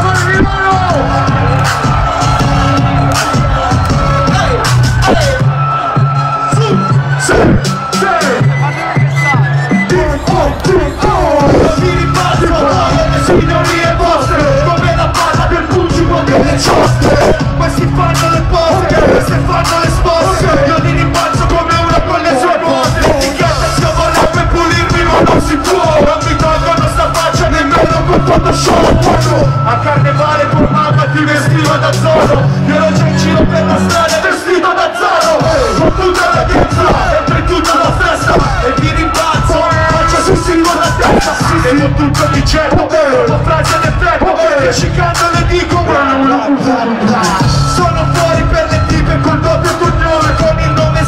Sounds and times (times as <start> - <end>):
Music: 0.0 - 51.0.